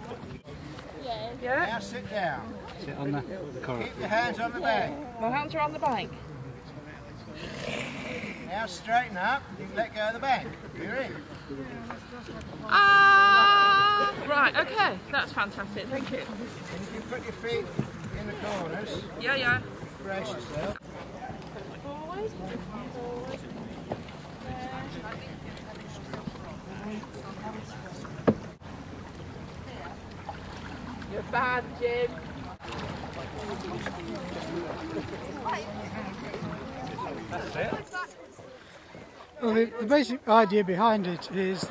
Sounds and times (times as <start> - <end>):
Rowboat, canoe, kayak: 0.0 - 41.7.